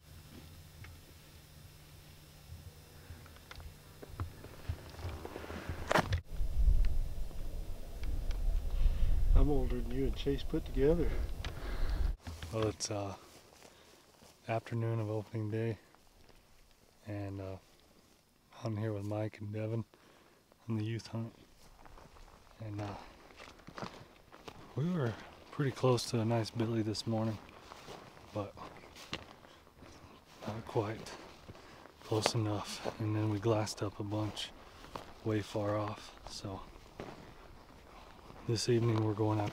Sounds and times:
Speech: 9.4 - 11.3, 12.5 - 13.2, 14.4 - 15.8, 17.0 - 17.7, 18.5 - 19.9, 20.6 - 21.4, 22.6 - 23.1, 24.8 - 27.4, 28.3 - 28.7, 30.4 - 31.2, 32.0 - 34.5, 35.2 - 36.7, 38.4 - 39.5.

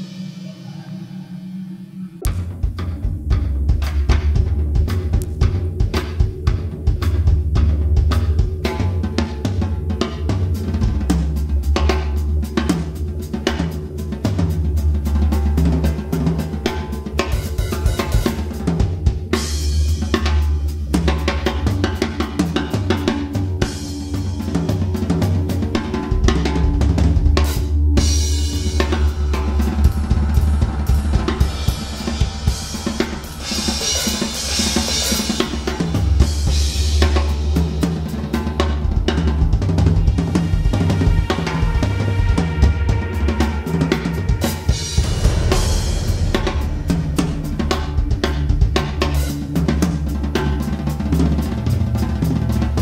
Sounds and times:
Drum kit: 0.0 - 52.8
Bass drum: 2.2 - 15.8, 16.7 - 43.1, 44.2 - 50.8.

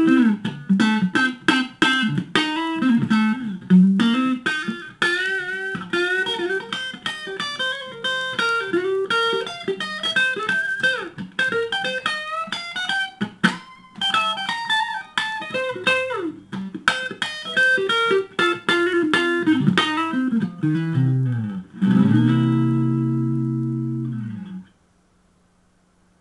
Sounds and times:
Electric guitar: 0.0 - 24.7.

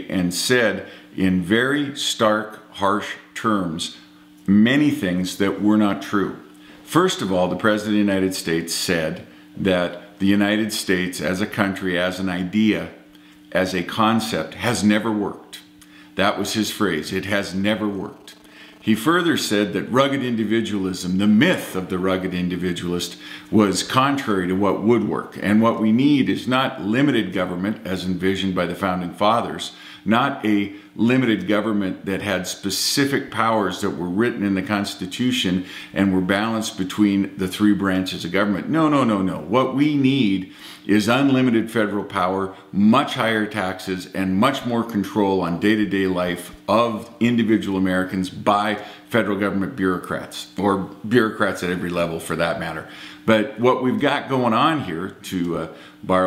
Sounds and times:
Male speech, man speaking: 0.0 - 56.2
Narration, monologue: 0.0 - 56.2.

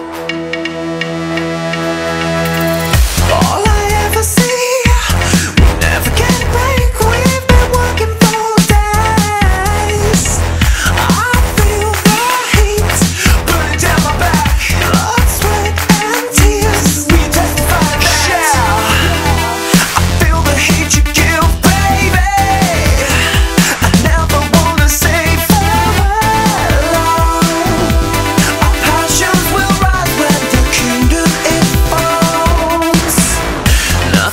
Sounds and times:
Music: 0.0 - 34.3.

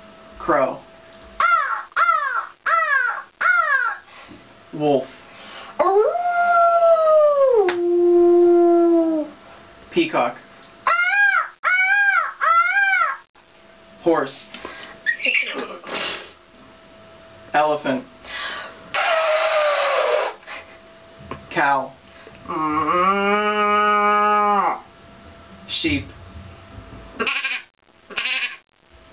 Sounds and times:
Speech: 0.4 - 0.8, 4.8 - 5.1, 9.9 - 10.5, 14.0 - 14.6, 17.6 - 18.1, 21.5 - 22.8, 25.7 - 26.2.

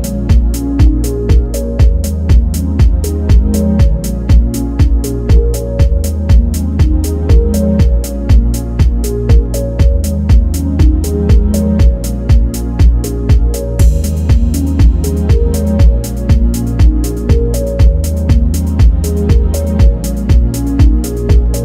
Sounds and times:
Music: 0.0 - 21.6.

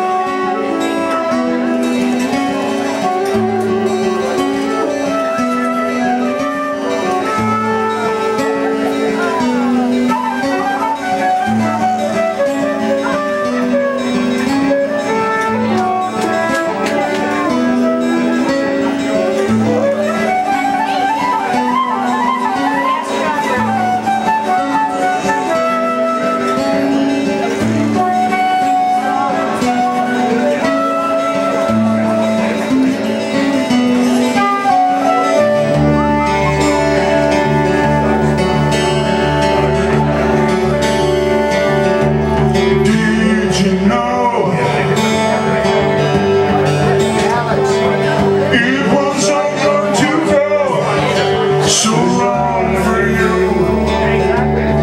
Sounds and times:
Acoustic guitar: 0.0 - 54.8
Strum: 0.0 - 54.8
Speech: 2.2 - 54.8.

